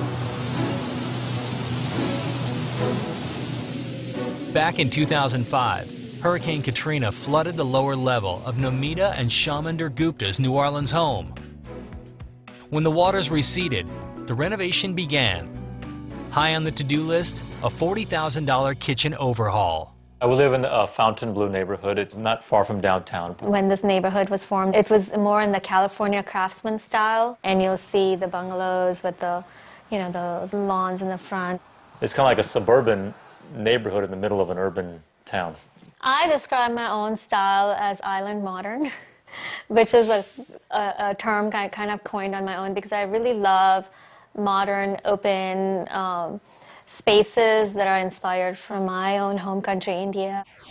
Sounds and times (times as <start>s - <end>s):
Speech: 4.6s - 11.4s, 12.7s - 15.5s, 16.4s - 38.8s.